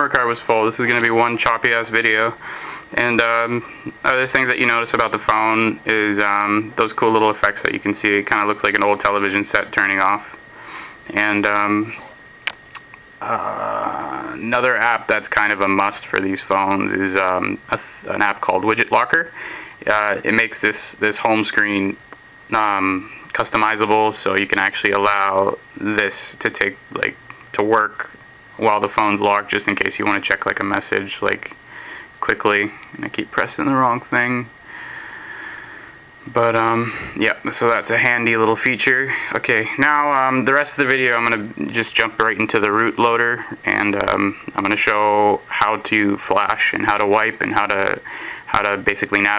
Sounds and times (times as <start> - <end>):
Speech: 0.0 - 2.4, 3.0 - 10.4, 11.1 - 12.1, 13.2 - 31.6, 32.2 - 34.5, 36.3 - 49.3.